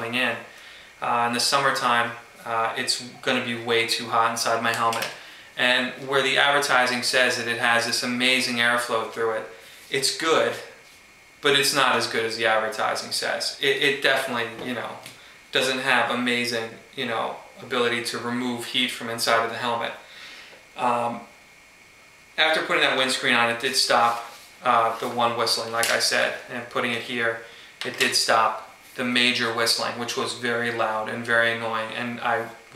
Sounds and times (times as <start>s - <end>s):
Speech: 0.0s - 10.8s, 11.4s - 20.0s, 20.8s - 21.3s, 22.4s - 32.7s.